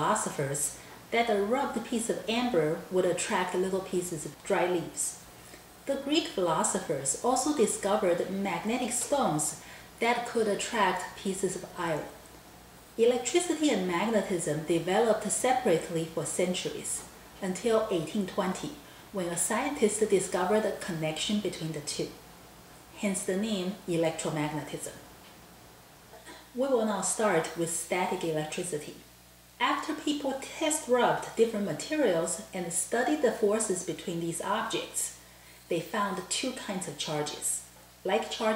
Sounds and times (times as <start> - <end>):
Speech: 0.0 - 5.2, 5.9 - 12.2, 13.0 - 22.2, 23.0 - 25.1, 26.3 - 38.5.